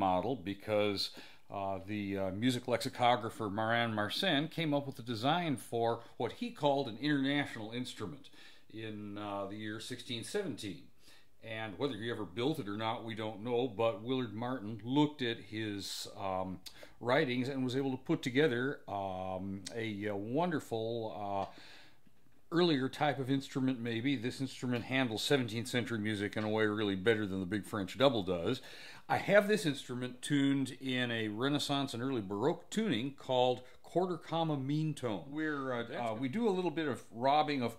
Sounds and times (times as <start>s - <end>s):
Speech: 0.0s - 21.6s, 22.5s - 37.7s.